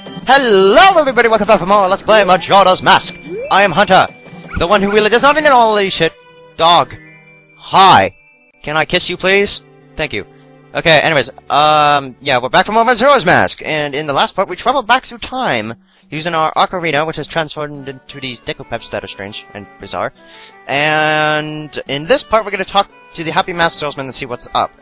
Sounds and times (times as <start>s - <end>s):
Music: 0.0s - 24.8s
Speech: 0.3s - 7.0s, 7.6s - 10.2s, 10.8s - 20.1s, 20.7s - 24.7s.